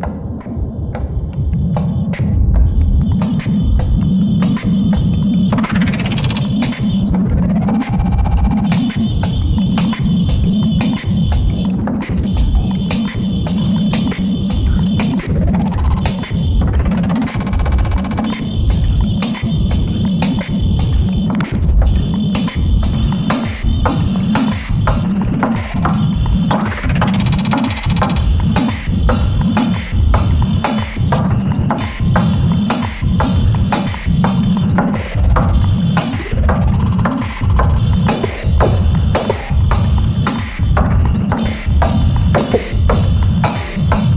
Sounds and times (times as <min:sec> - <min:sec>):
Throbbing: 0:00.0 - 0:44.1.